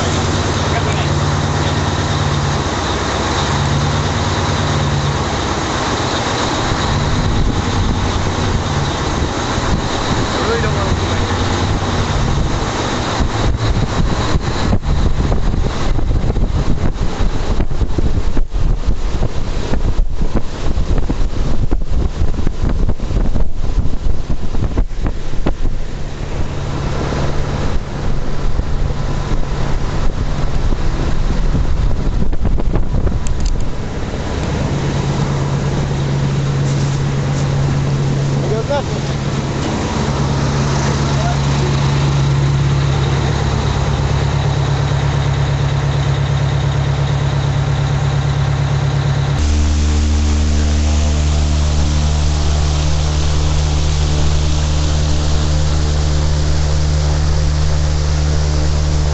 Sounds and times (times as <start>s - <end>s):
Wind noise (microphone): 6.7s - 35.8s.